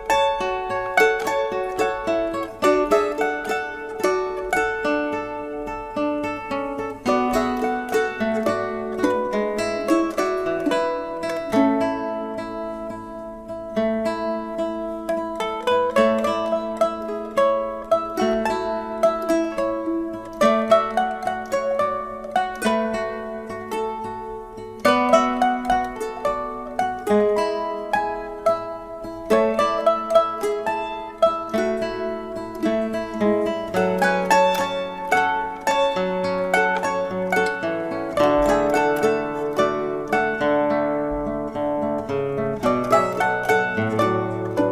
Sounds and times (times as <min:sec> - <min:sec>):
Music: 0:00.0 - 0:44.7.